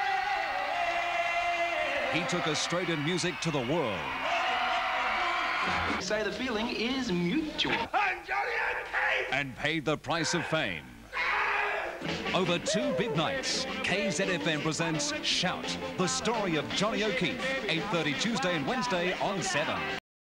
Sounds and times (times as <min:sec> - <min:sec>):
Music: 0:00.0 - 0:07.8, 0:12.0 - 0:20.0
Speech: 0:02.1 - 0:04.1, 0:06.0 - 0:11.0, 0:12.4 - 0:20.0.